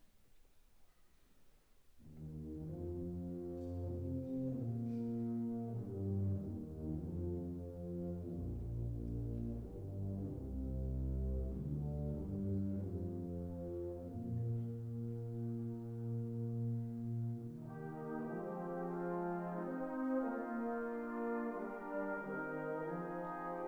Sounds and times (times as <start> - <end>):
Music: 0.0 - 23.6.